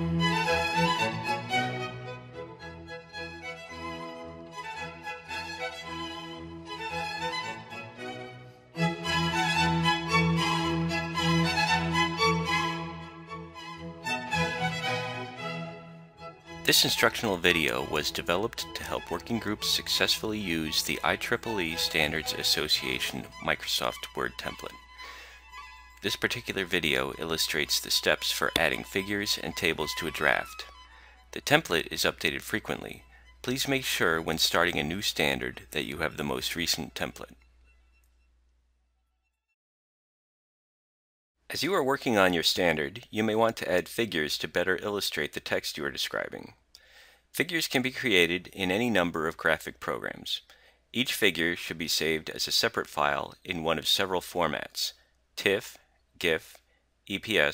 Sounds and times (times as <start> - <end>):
Music: 0.0 - 38.4
Speech: 16.7 - 24.8, 26.0 - 30.7, 31.4 - 37.4, 41.5 - 46.6, 47.4 - 57.5.